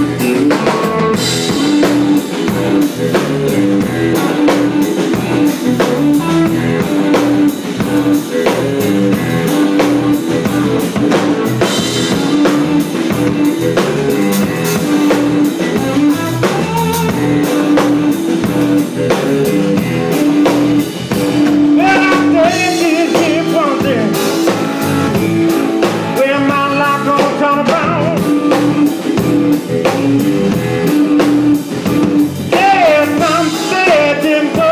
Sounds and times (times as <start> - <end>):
Blues: 0.0 - 34.7.